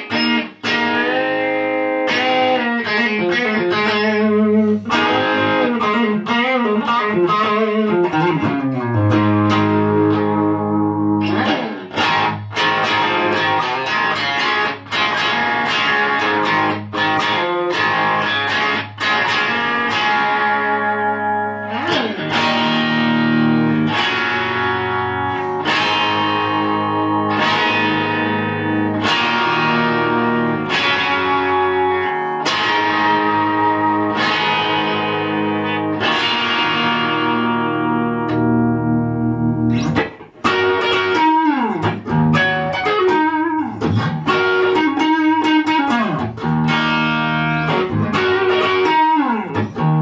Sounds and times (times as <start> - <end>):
Electric guitar: 0.0 - 50.0
Strum: 0.0 - 50.0.